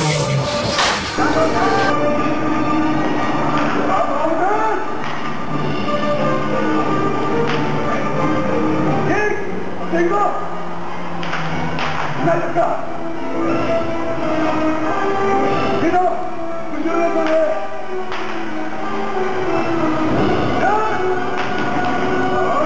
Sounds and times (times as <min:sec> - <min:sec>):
Music: 0:00.0 - 0:22.6
Speech: 0:09.1 - 0:10.5, 0:12.2 - 0:12.8, 0:15.8 - 0:17.7, 0:20.6 - 0:21.0.